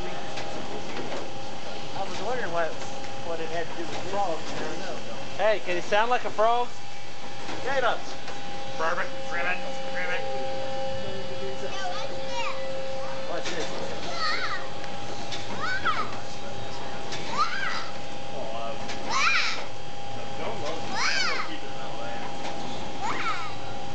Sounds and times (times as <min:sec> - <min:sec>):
Speech: 0:20.1 - 0:22.4.